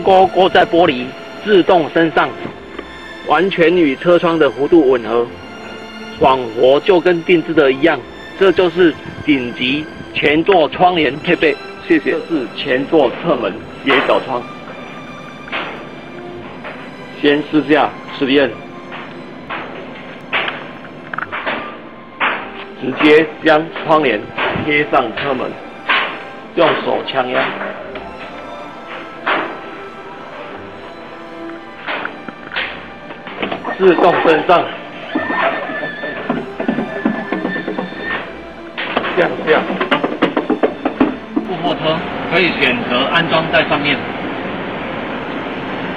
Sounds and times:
Speech: 0.0 - 2.4, 3.3 - 5.3, 6.2 - 14.4, 17.2 - 18.6, 22.8 - 25.6, 26.6 - 27.6, 33.7 - 34.7, 39.2 - 39.7, 41.4 - 44.0
Music: 0.0 - 45.9.

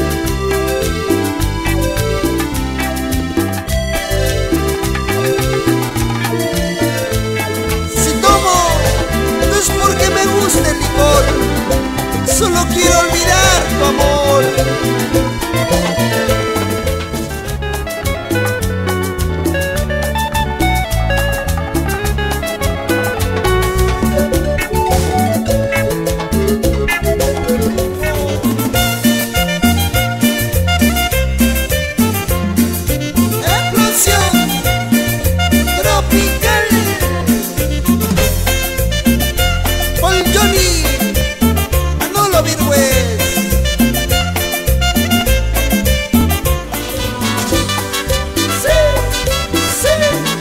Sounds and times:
Music: 0.0 - 50.4.

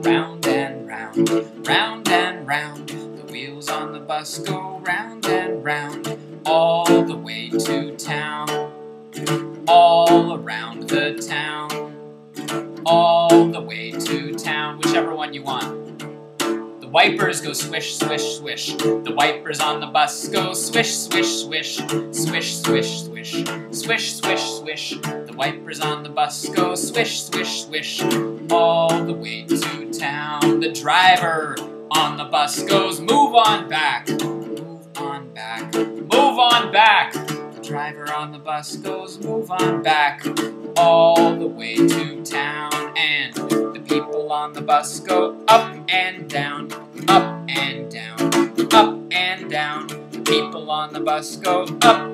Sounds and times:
Music: 0.0 - 52.1.

